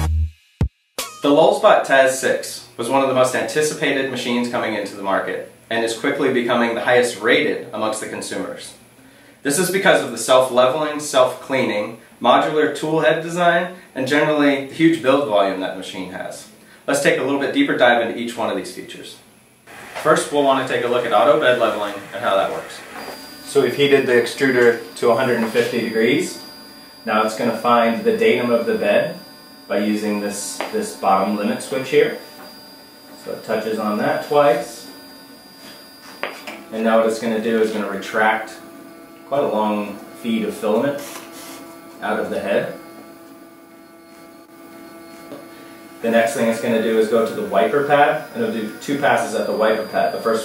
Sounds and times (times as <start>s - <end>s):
Speech: 1.2s - 8.8s, 9.4s - 19.3s, 20.0s - 22.9s, 23.5s - 26.4s, 27.0s - 32.2s, 33.2s - 35.0s, 36.7s - 38.6s, 39.3s - 41.1s, 42.0s - 42.8s, 46.0s - 50.4s
Printer: 19.7s - 50.4s.